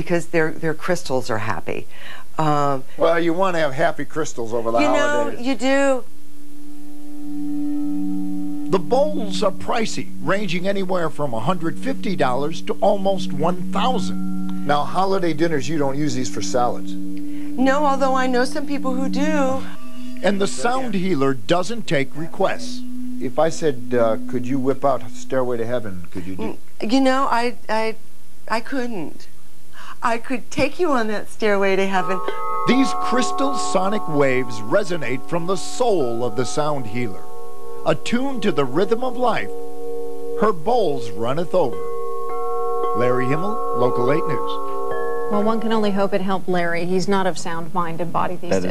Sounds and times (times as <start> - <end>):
Singing bowl: 4.6 - 5.9, 6.6 - 25.6, 31.7 - 47.3.